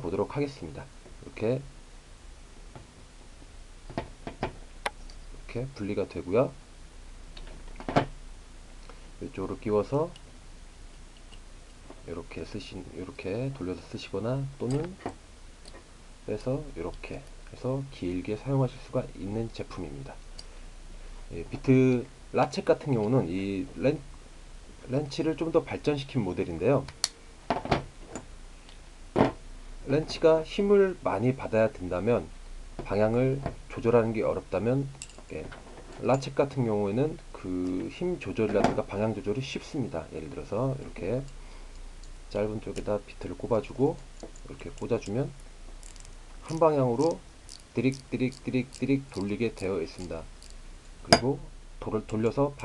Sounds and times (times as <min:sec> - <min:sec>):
Speech: 0:00.0 - 0:01.7, 0:05.4 - 0:06.6, 0:09.2 - 0:10.2, 0:12.0 - 0:15.0, 0:16.3 - 0:20.2, 0:21.3 - 0:24.1, 0:24.8 - 0:27.0, 0:29.8 - 0:41.3, 0:42.3 - 0:45.4, 0:46.4 - 0:47.2, 0:47.8 - 0:50.3, 0:51.1 - 0:52.6.